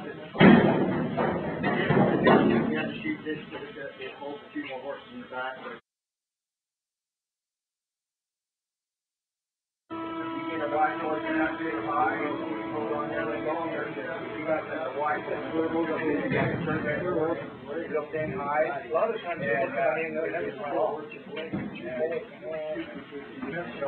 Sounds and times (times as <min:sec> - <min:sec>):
Speech: 0:00.0 - 0:05.8, 0:10.5 - 0:23.8.